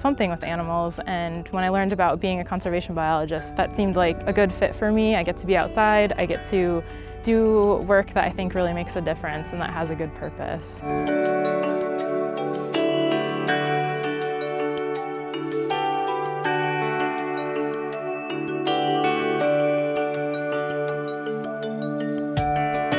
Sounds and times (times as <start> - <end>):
Speech: 0.0 - 10.8
Music: 0.0 - 22.9.